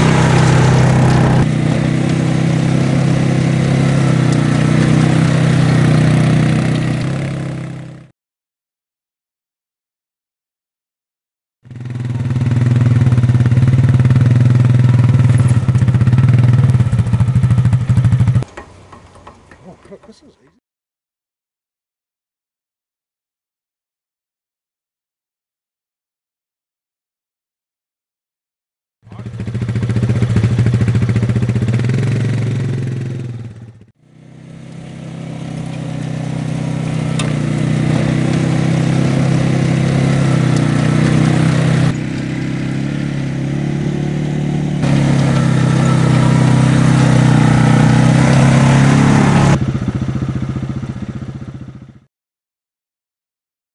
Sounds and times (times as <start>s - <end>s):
Speech: 19.6s - 20.6s, 29.1s - 29.4s.